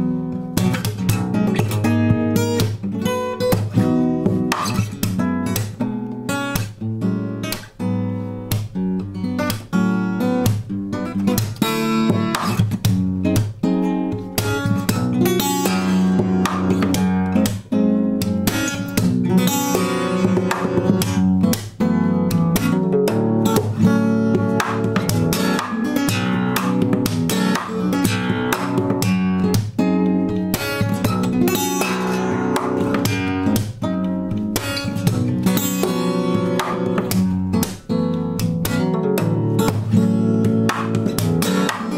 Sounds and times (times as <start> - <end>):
Acoustic guitar: 0.0 - 41.9.